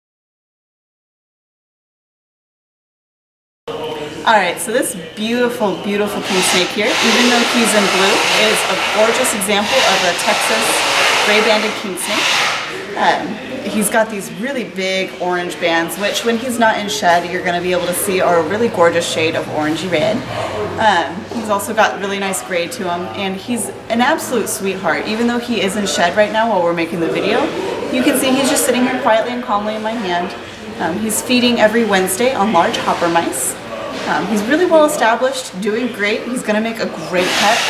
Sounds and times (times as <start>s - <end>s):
Inside, large room or hall: 3.7s - 37.7s
Speech: 3.7s - 37.7s.